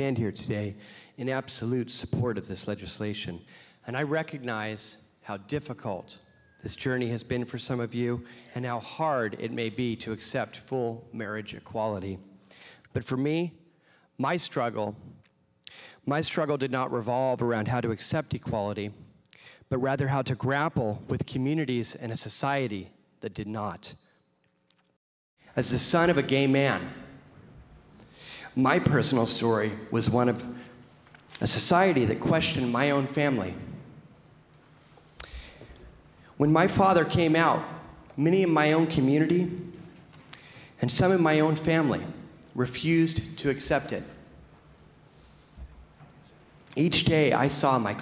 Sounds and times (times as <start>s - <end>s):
Male speech, man speaking: 0.0s - 12.2s, 13.0s - 13.6s, 14.2s - 15.0s, 16.1s - 19.0s, 19.7s - 24.0s, 25.6s - 27.1s, 28.5s - 30.6s, 31.4s - 33.7s, 36.4s - 39.7s, 40.8s - 44.2s, 46.8s - 48.0s
Narration, monologue: 0.0s - 48.0s.